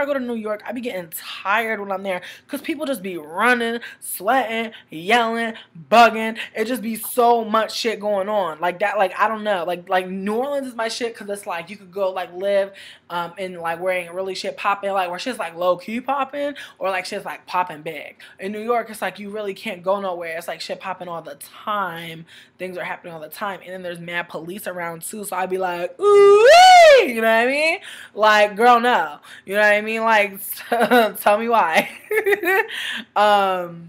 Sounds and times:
Speech: 0.0 - 26.2, 27.0 - 32.6, 33.2 - 33.8.

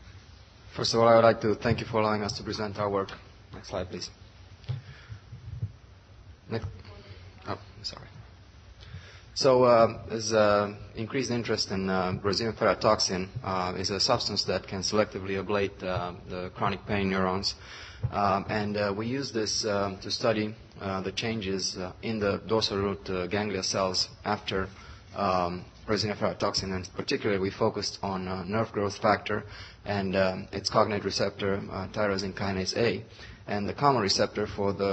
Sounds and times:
Speech: 0.8 - 4.2, 6.5 - 8.2, 9.4 - 34.9.

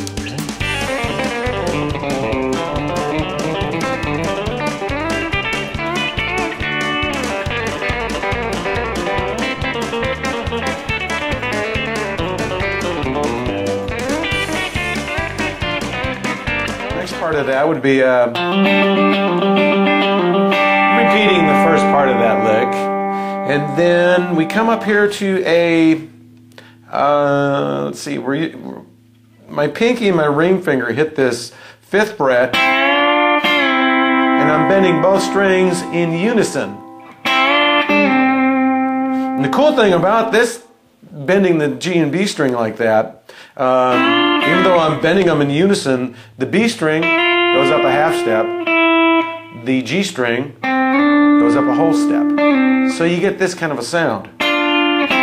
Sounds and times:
Electric guitar: 0.0 - 30.5, 32.4 - 40.9, 43.3 - 55.2
Strum: 0.0 - 41.0, 43.7 - 55.2
Speech: 16.9 - 18.4, 20.9 - 22.9, 23.5 - 26.1, 26.9 - 32.6, 34.4 - 36.8, 39.4 - 48.5, 49.6 - 50.6, 51.4 - 54.3.

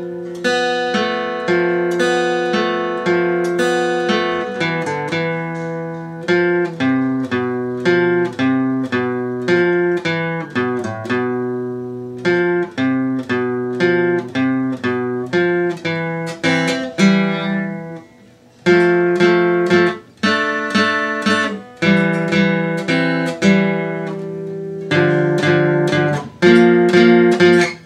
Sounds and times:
Guitar: 0.0 - 27.8.

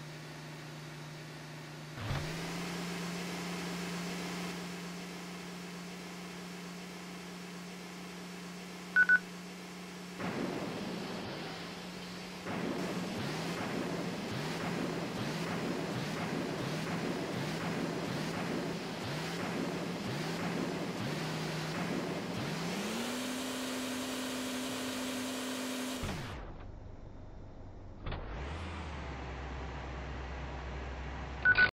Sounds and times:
Car: 0.0 - 31.7.

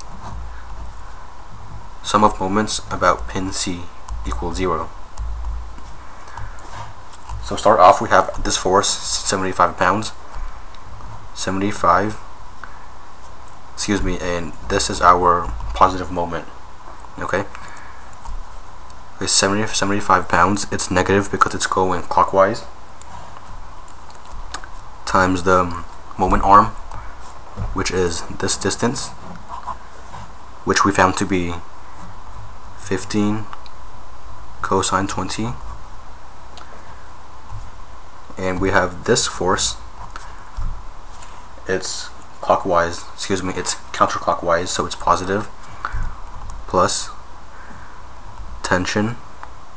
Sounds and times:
Speech: 2.0 - 5.0, 7.4 - 10.2, 11.4 - 12.2, 13.8 - 16.5, 17.2 - 17.5, 19.2 - 22.8, 25.1 - 26.8, 27.6 - 29.2, 30.7 - 31.7, 32.8 - 33.5, 34.6 - 35.6, 38.4 - 39.8, 41.6 - 45.6, 46.7 - 47.2, 48.6 - 49.2.

